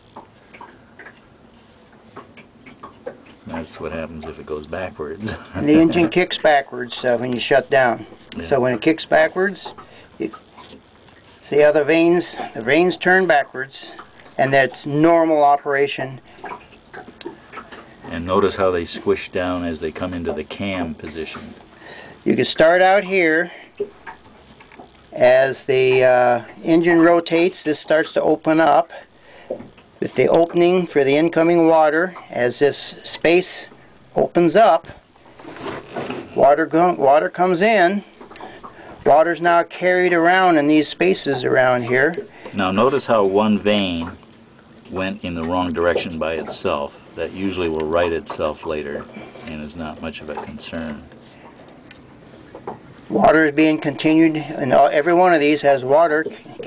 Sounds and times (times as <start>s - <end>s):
Speech: 3.4s - 10.4s, 11.4s - 16.2s, 18.1s - 21.6s, 22.2s - 23.6s, 25.1s - 29.0s, 30.0s - 35.0s, 36.4s - 38.1s, 39.0s - 44.2s, 44.9s - 51.1s, 53.1s - 56.6s.